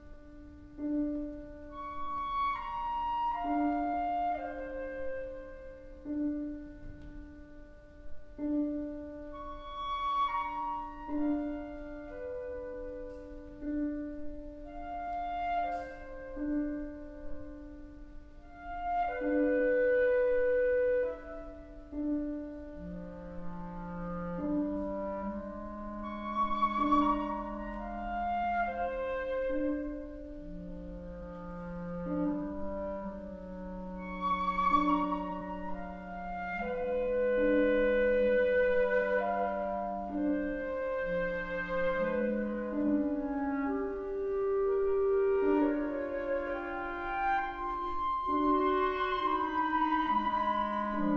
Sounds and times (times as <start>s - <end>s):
Clarinet: 0.0s - 51.1s.